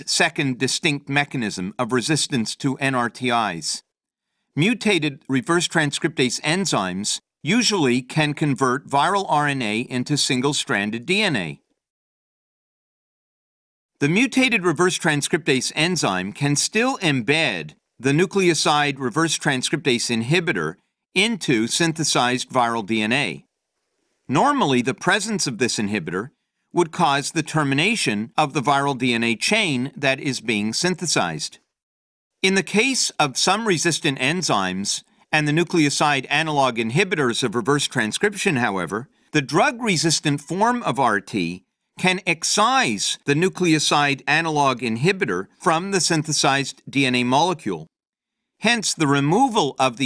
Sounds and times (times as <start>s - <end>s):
Speech: 0.0s - 3.9s, 4.6s - 11.7s, 14.0s - 23.5s, 24.3s - 31.7s, 32.4s - 48.0s, 48.6s - 50.0s.